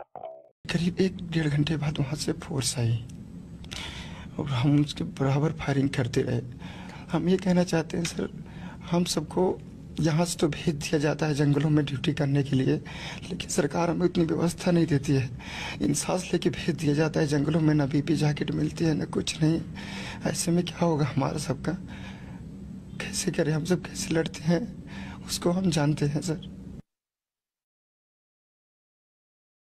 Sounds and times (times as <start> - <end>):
Speech: 0.0 - 3.1, 4.4 - 6.5, 7.1 - 21.8, 23.0 - 26.5.